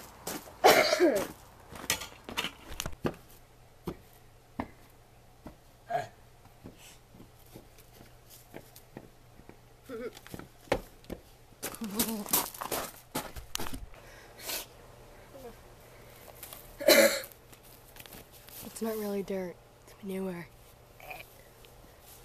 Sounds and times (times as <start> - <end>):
Outside, urban or manmade: 0.0 - 22.2.